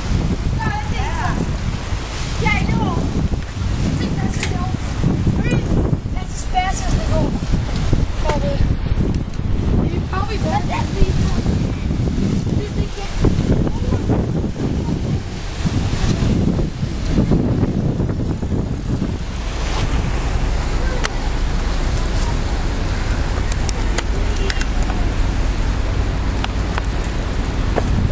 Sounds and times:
Ship: 0.0s - 28.1s
Speech: 0.6s - 1.4s, 2.4s - 3.1s, 5.4s - 7.4s, 8.2s - 8.7s, 9.8s - 11.6s, 12.5s - 15.3s, 23.5s - 25.0s.

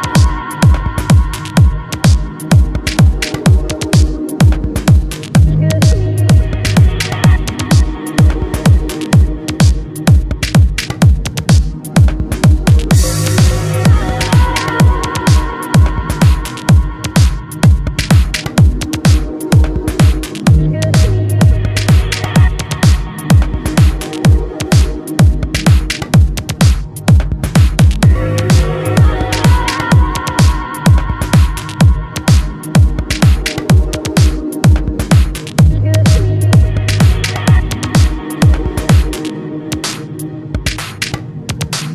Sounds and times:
Electronica: 0.0s - 41.9s.

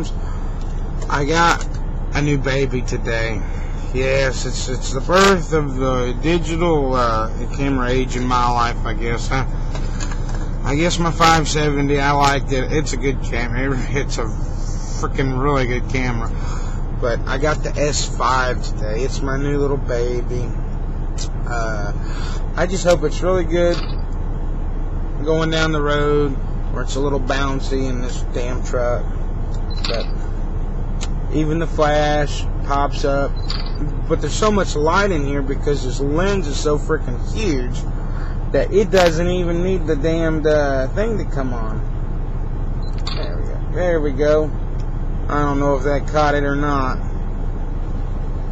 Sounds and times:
Speech: 0.0s - 0.4s, 1.0s - 9.6s, 10.6s - 20.6s, 21.2s - 23.9s, 25.2s - 29.1s, 29.7s - 30.2s, 31.0s - 41.9s, 43.1s - 44.6s, 45.3s - 47.0s.

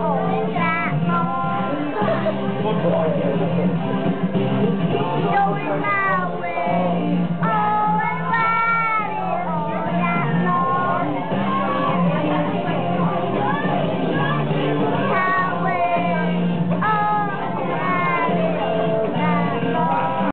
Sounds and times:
Child singing: 0.0s - 2.2s, 5.2s - 12.2s, 14.2s - 20.3s
Music: 0.0s - 20.3s.

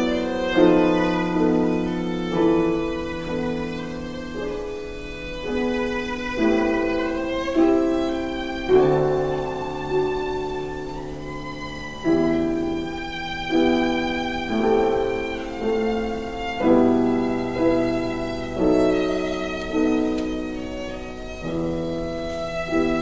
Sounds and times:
Violin, fiddle: 0.0s - 23.0s.

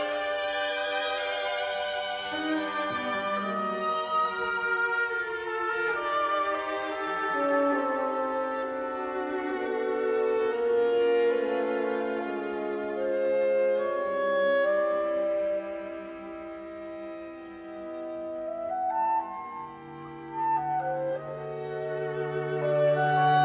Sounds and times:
Music: 0.0s - 23.4s.

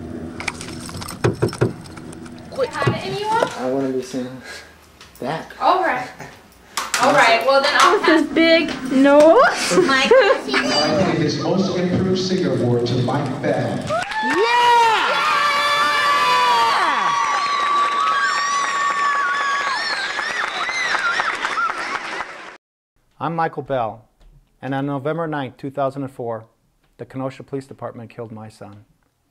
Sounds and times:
Speech: 10.5s - 13.8s, 23.2s - 24.0s, 24.6s - 28.9s.

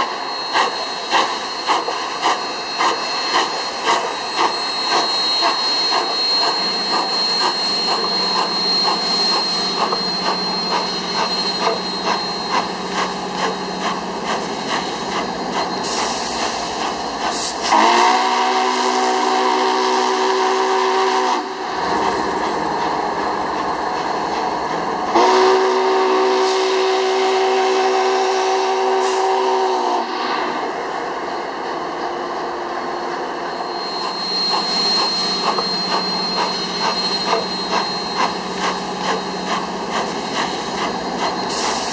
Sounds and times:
Railroad car, train wagon: 0.0s - 41.9s
Train: 0.0s - 41.9s.

